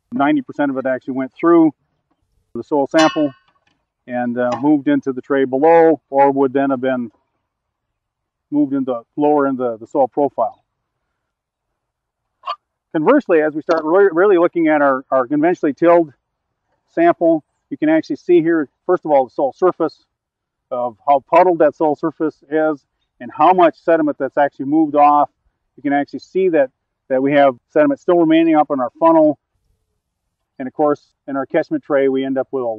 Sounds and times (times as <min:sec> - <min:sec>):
Outside, rural or natural: 0:00.0 - 0:32.7
Speech: 0:00.1 - 0:01.7, 0:02.6 - 0:03.3, 0:04.1 - 0:07.1, 0:08.5 - 0:10.6, 0:12.9 - 0:16.1, 0:16.9 - 0:20.0, 0:20.7 - 0:29.4, 0:30.6 - 0:32.7.